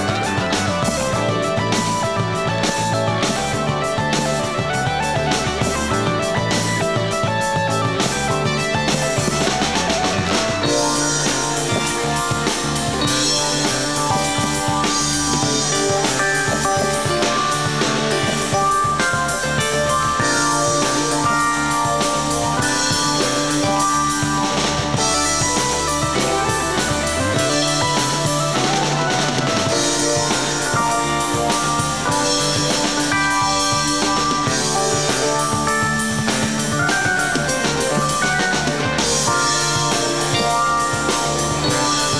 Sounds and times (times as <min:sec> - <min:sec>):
Progressive rock: 0:00.0 - 0:42.1.